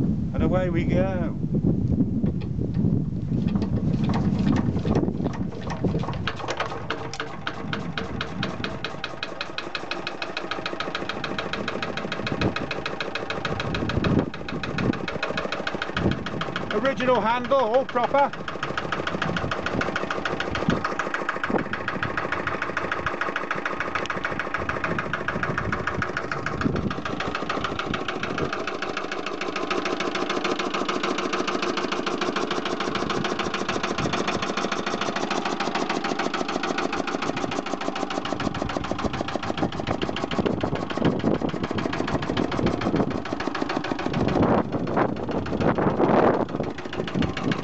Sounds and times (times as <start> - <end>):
Speech: 0.3 - 1.4, 16.7 - 18.4
Medium engine (mid frequency): 2.3 - 47.6
Engine starting: 3.4 - 47.6
Idling: 3.5 - 47.6.